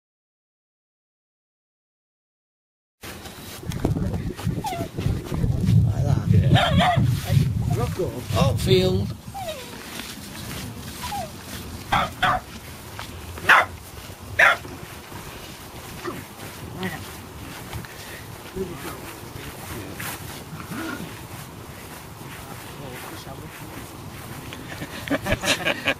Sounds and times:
Bark: 6.5s - 7.1s, 11.9s - 12.5s, 13.4s - 13.8s, 14.4s - 14.7s
Bow-wow: 6.5s - 7.1s, 11.9s - 12.5s, 13.4s - 13.8s, 14.4s - 14.7s.

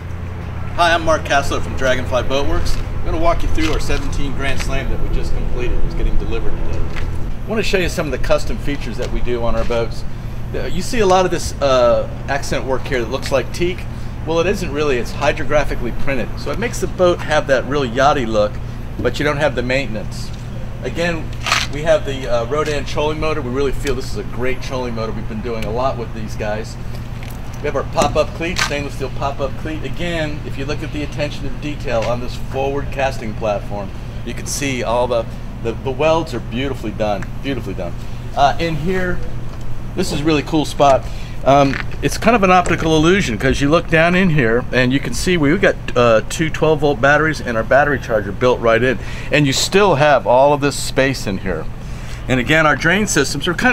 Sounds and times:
Speech: 0.8s - 6.8s, 7.5s - 26.8s, 27.6s - 39.3s, 40.0s - 51.7s, 52.3s - 53.7s.

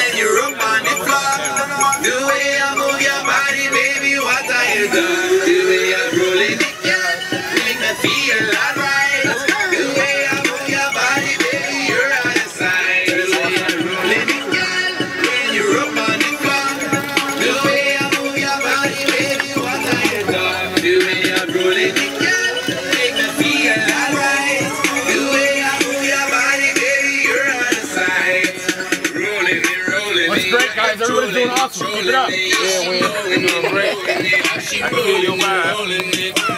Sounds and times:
Soundtrack music: 0.0s - 36.5s.

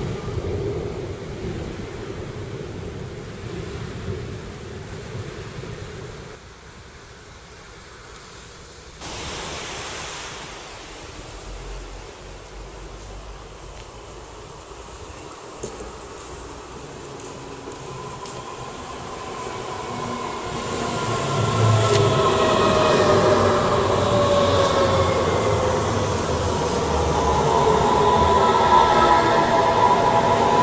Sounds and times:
Railroad car, train wagon: 0.0s - 30.6s
Train: 0.0s - 30.6s.

